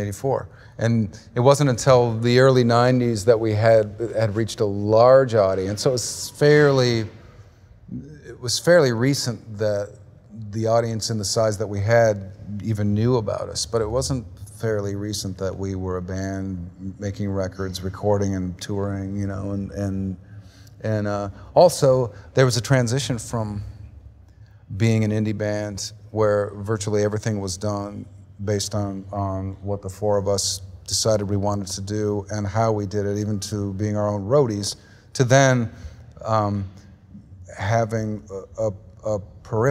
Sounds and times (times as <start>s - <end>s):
Speech: 0.0s - 7.3s, 7.9s - 20.2s, 20.8s - 23.9s, 24.7s - 39.7s.